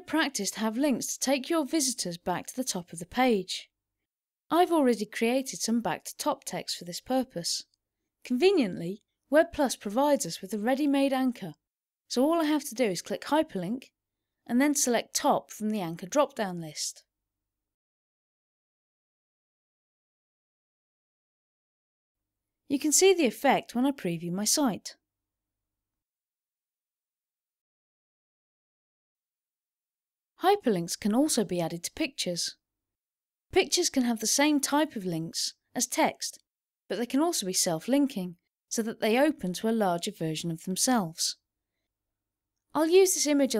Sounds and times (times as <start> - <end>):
Speech: 0.0 - 3.7, 4.5 - 7.7, 8.3 - 13.9, 14.5 - 17.0, 22.7 - 25.0, 30.4 - 32.6, 33.5 - 41.4, 42.8 - 43.5.